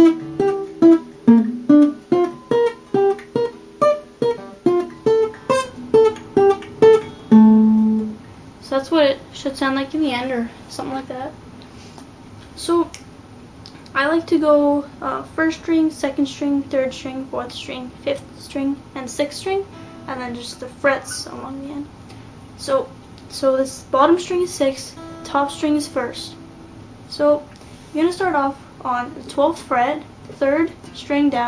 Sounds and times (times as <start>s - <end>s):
Speech: 8.6s - 11.4s, 12.6s - 13.0s, 13.8s - 21.9s, 22.6s - 26.4s, 27.1s - 31.4s.